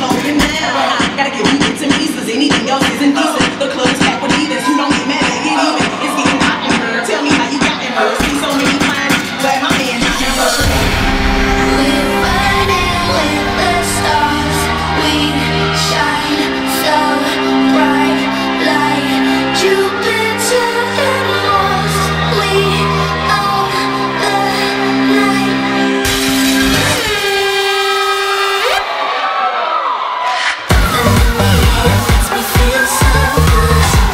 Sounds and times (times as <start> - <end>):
Music: 0.0 - 29.6, 30.3 - 34.1
Inside, large room or hall: 0.0 - 34.1.